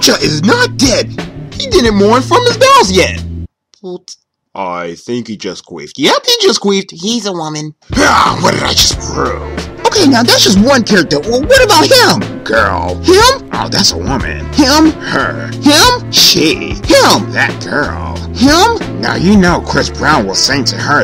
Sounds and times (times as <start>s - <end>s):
Music: 0.0s - 3.5s, 7.8s - 21.0s
Speech: 3.8s - 21.0s.